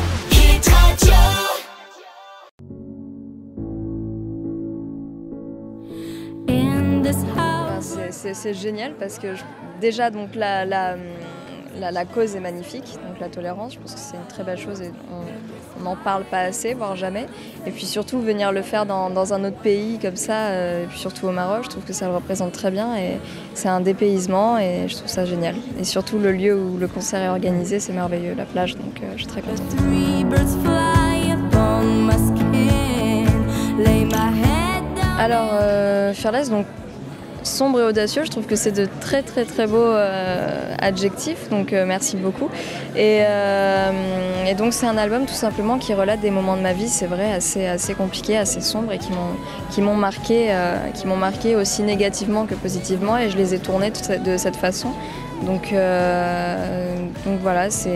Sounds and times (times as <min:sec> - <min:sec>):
Music: 0:00.0 - 0:57.9
Speech: 0:07.3 - 0:30.0, 0:33.8 - 0:57.9.